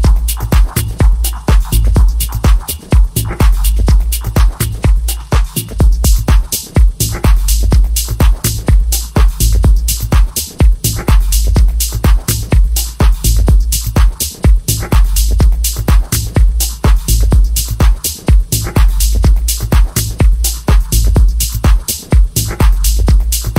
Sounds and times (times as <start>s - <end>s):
Music: 0.0s - 23.5s.